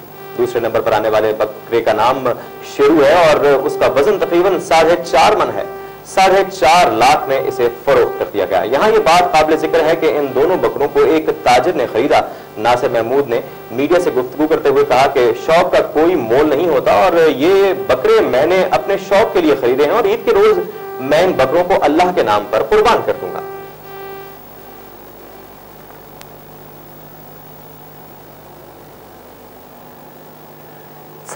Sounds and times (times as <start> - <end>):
Speech: 0.4 - 23.5.